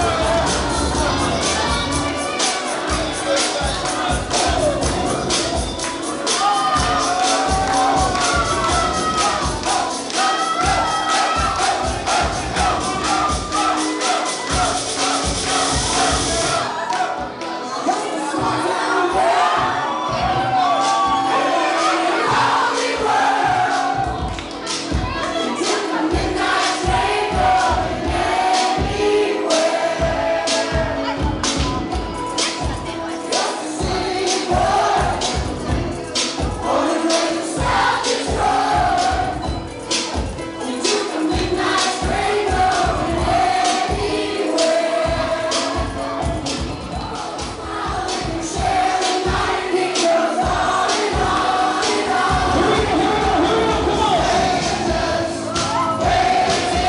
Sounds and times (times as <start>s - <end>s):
Wedding music: 0.0s - 56.8s.